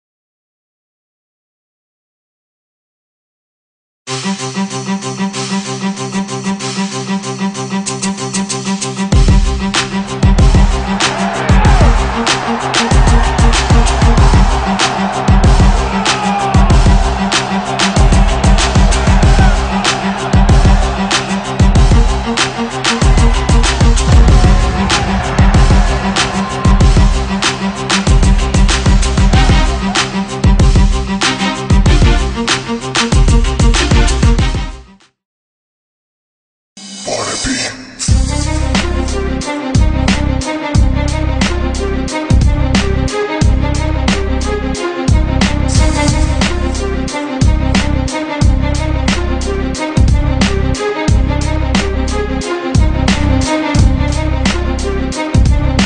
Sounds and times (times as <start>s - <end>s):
Theme music: 4.1s - 34.9s, 36.8s - 55.8s
Exciting music: 4.1s - 35.0s, 36.8s - 55.8s.